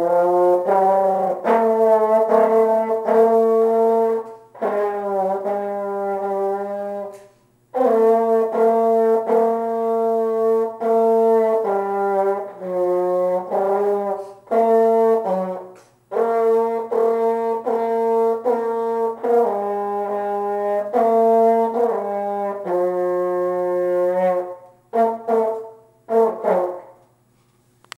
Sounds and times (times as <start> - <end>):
French horn: 0.0 - 27.1.